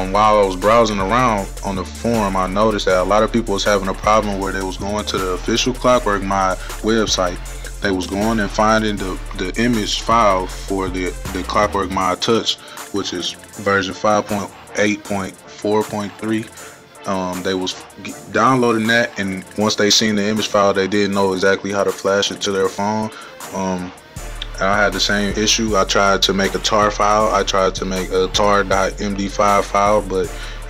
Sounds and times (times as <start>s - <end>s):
Speech: 0.0s - 30.4s
Music: 0.0s - 30.6s.